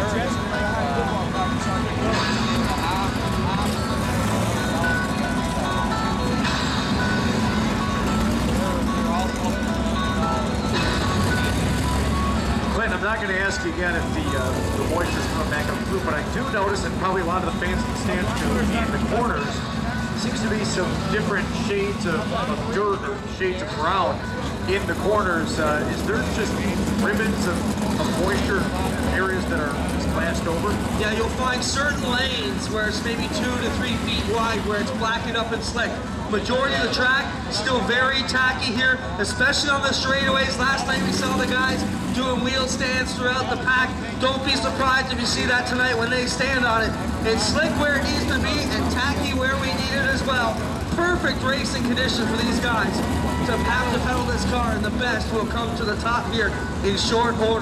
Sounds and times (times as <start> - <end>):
Speech: 0.0 - 3.9, 12.7 - 19.6, 20.2 - 57.6.